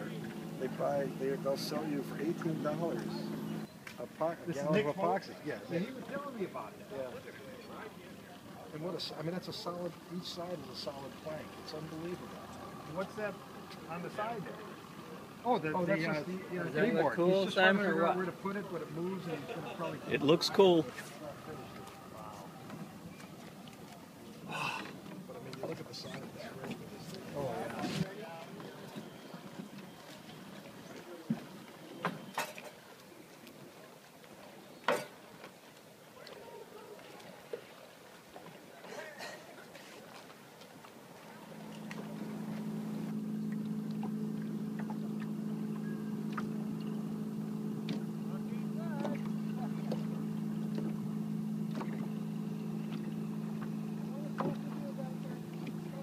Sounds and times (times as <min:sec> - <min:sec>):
Speech: 0:00.0 - 0:03.4, 0:04.0 - 0:22.8, 0:25.2 - 0:29.0, 0:48.2 - 0:50.1.